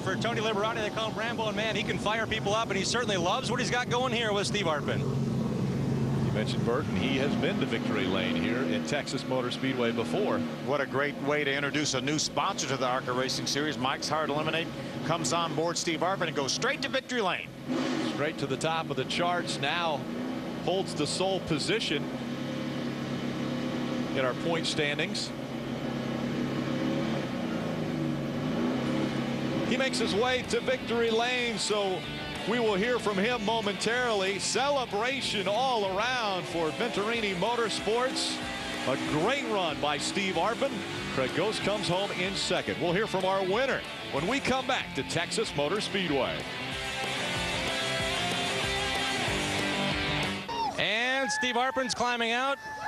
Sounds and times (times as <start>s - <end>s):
Speech: 0.0s - 5.0s, 6.4s - 17.5s, 18.1s - 20.0s, 20.7s - 22.0s, 24.2s - 25.4s, 29.7s - 46.4s, 50.8s - 52.6s
Race car, auto racing: 0.0s - 52.8s.